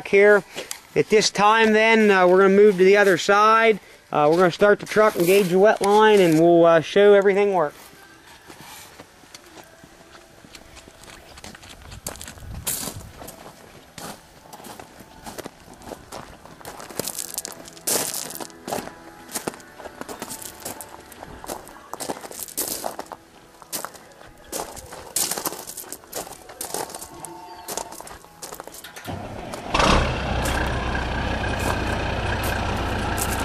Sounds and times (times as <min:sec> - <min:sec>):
Walk, footsteps: 0:07.8 - 0:28.8.